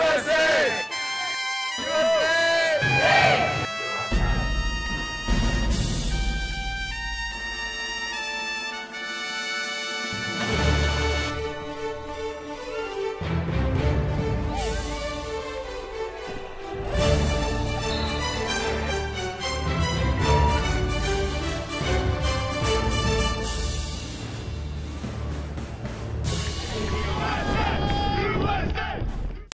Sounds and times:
Music: 0.0s - 29.5s.

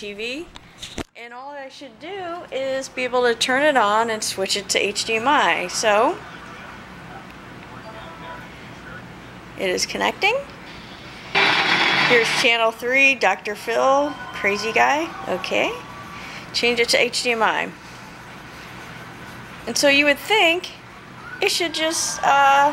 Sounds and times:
Speech: 0.0s - 0.5s, 1.2s - 10.5s, 12.2s - 15.8s, 16.6s - 17.8s, 19.7s - 20.8s, 21.4s - 22.7s
Television: 2.8s - 22.7s.

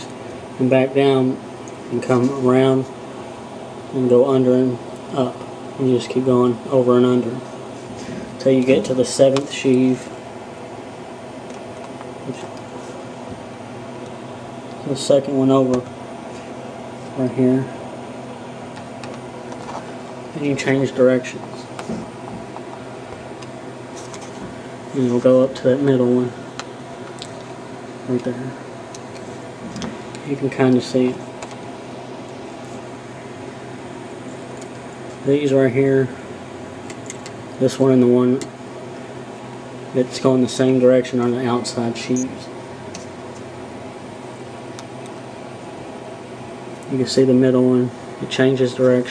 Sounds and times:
Speech: 0.0s - 3.0s, 3.9s - 7.5s, 8.4s - 10.1s, 12.3s - 12.6s, 14.8s - 15.9s, 17.2s - 17.8s, 20.3s - 21.7s, 24.9s - 26.4s, 28.1s - 28.6s, 30.2s - 31.2s, 35.2s - 36.2s, 37.6s - 38.5s, 39.9s - 42.5s, 46.9s - 49.1s.

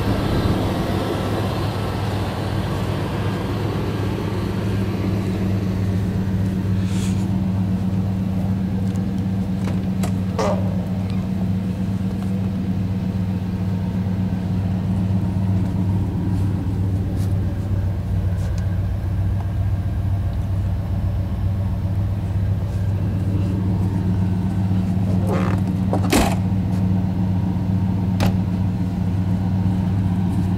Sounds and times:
Vehicle: 0.0s - 30.5s.

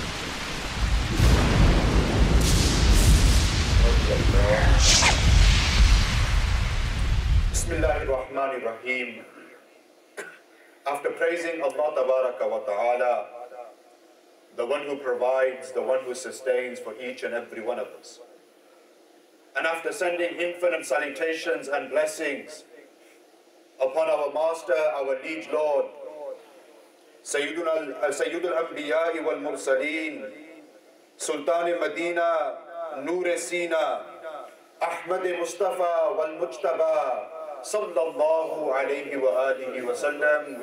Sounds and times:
Narration, monologue: 0.0s - 40.6s
Male speech, man speaking: 3.9s - 4.8s, 7.6s - 9.6s, 10.9s - 13.4s, 14.6s - 18.2s, 19.6s - 22.7s, 23.8s - 26.4s, 27.3s - 30.4s, 31.2s - 34.1s, 34.8s - 40.6s.

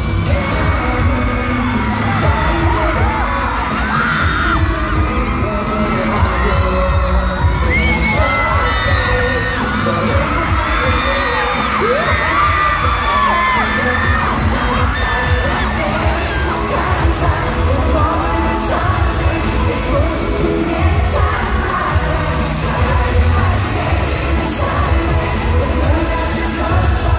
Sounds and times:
Music: 0.0s - 27.1s.

